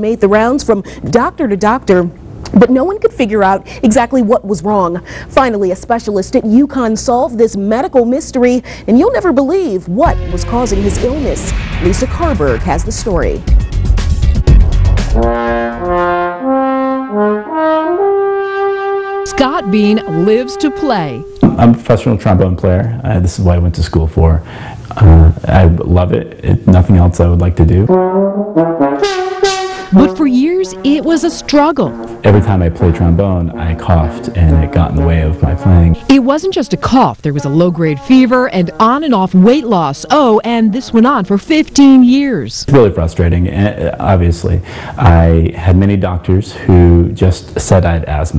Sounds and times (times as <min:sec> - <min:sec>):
Music: 0:10.0 - 0:22.5, 0:27.6 - 0:40.1
Speech: 0:19.3 - 0:27.9, 0:32.3 - 0:48.3.